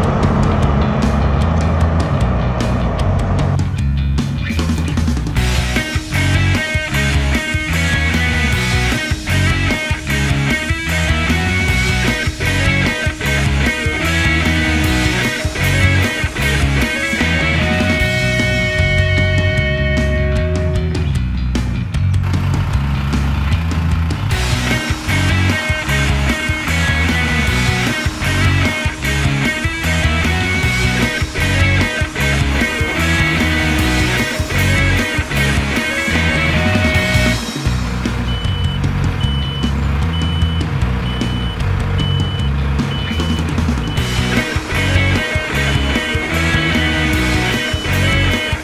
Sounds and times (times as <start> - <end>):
Music: 0.0 - 48.6.